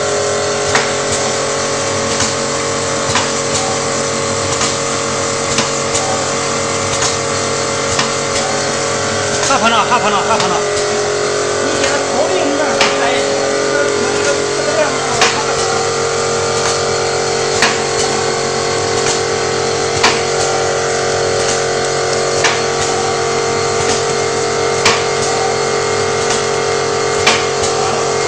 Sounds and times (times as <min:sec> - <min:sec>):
Fill (with liquid): 0:00.0 - 0:28.2.